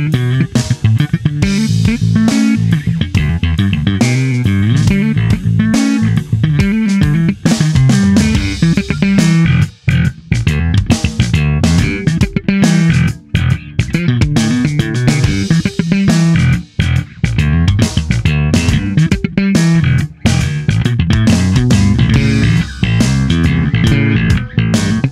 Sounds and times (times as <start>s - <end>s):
Bass guitar: 0.0s - 25.1s
Funk: 0.0s - 25.1s.